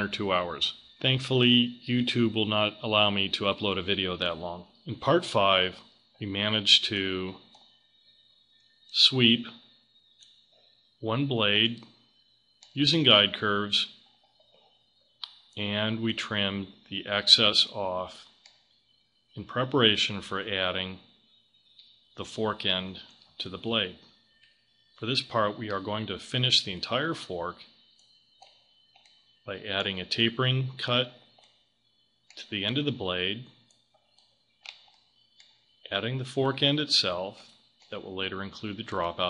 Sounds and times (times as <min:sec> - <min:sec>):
Speech: 0:00.0 - 0:07.5, 0:09.0 - 0:09.6, 0:11.0 - 0:11.9, 0:12.8 - 0:14.0, 0:15.6 - 0:18.2, 0:19.4 - 0:21.0, 0:22.2 - 0:24.0, 0:25.0 - 0:27.6, 0:29.5 - 0:31.2, 0:32.4 - 0:33.6, 0:35.9 - 0:39.2.